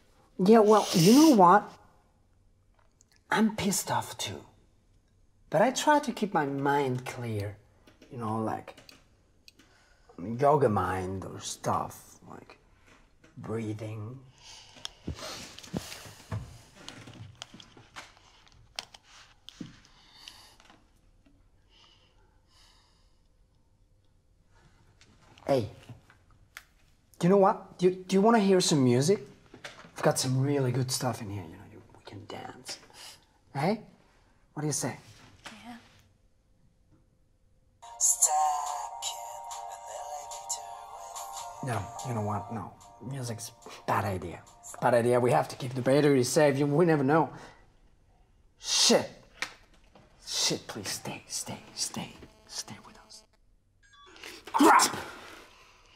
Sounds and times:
Inside, small room: 0:00.0 - 0:55.9.

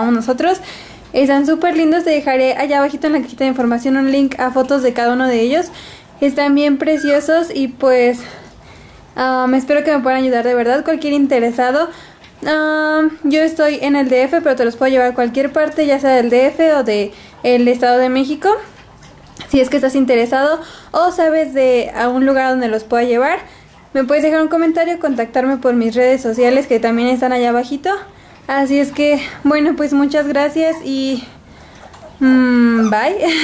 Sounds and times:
Speech: 0:00.0 - 0:08.4, 0:09.2 - 0:18.7, 0:19.5 - 0:31.4, 0:32.2 - 0:33.4.

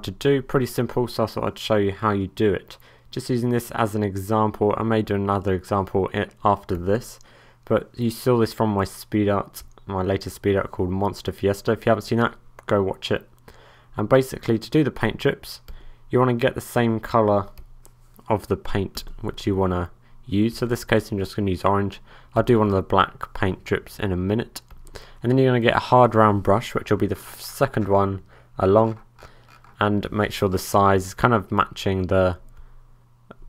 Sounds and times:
Speech: 0:00.0 - 0:13.3, 0:14.0 - 0:17.6, 0:18.2 - 0:29.0, 0:29.8 - 0:32.5.

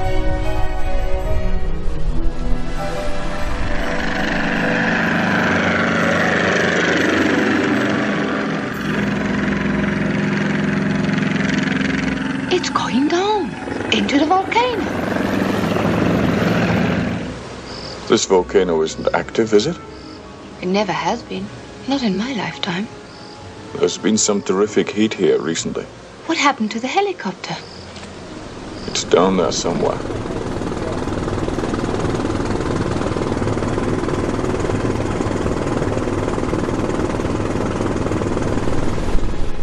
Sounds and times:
Music: 0:00.0 - 0:15.6, 0:18.1 - 0:38.6
Helicopter: 0:00.0 - 0:18.2, 0:26.1 - 0:39.6.

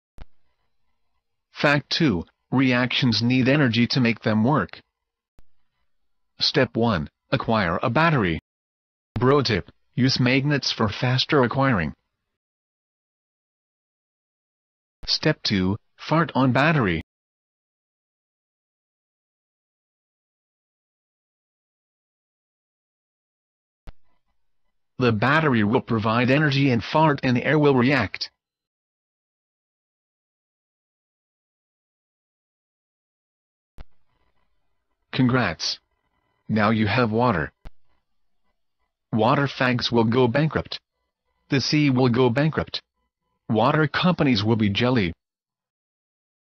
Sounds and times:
Speech: 0:01.6 - 0:04.9, 0:06.4 - 0:08.4, 0:09.2 - 0:12.0, 0:15.0 - 0:17.1, 0:25.0 - 0:28.4, 0:35.1 - 0:35.8, 0:36.5 - 0:37.6, 0:39.1 - 0:40.9, 0:41.5 - 0:42.9, 0:43.5 - 0:45.2.

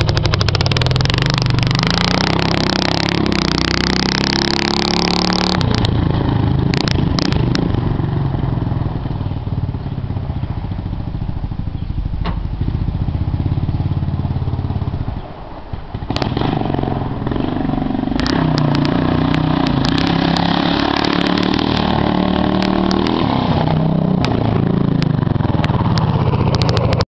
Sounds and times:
Vehicle: 0:00.0 - 0:27.1.

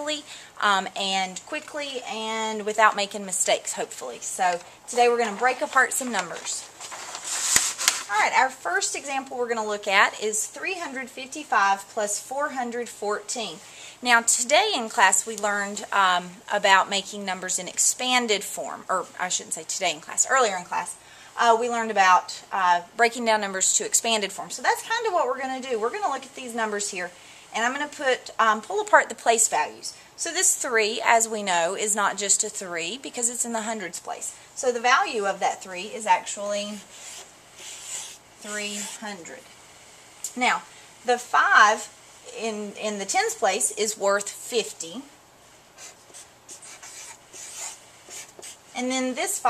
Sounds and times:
Speech: 0:00.0 - 0:06.7, 0:08.1 - 0:36.8, 0:38.4 - 0:39.5, 0:40.3 - 0:45.1, 0:48.8 - 0:49.4.

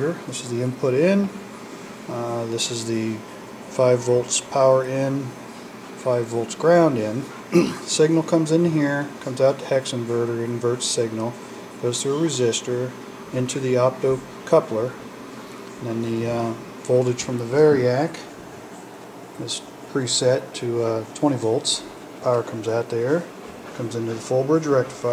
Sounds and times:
Speech: 0:00.0 - 0:01.4, 0:02.1 - 0:05.4, 0:06.0 - 0:15.1, 0:15.8 - 0:18.4, 0:19.4 - 0:25.1
Inside, small room: 0:00.0 - 0:25.1.

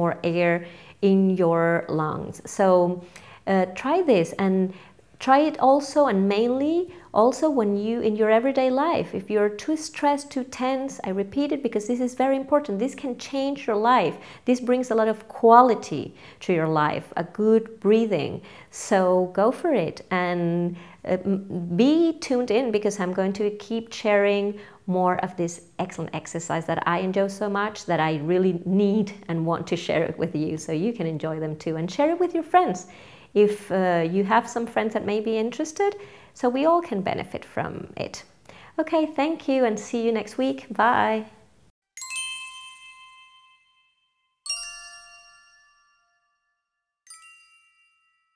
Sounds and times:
Speech: 0:00.0 - 0:41.4
Music: 0:42.0 - 0:45.7
Ding: 0:42.0 - 0:48.3.

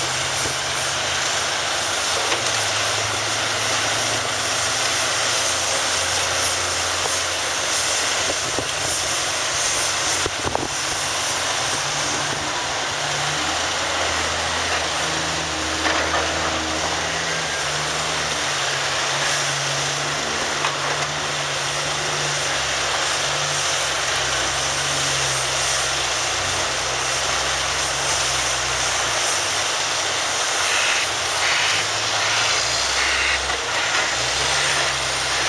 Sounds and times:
Steam: 0:00.0 - 0:35.4.

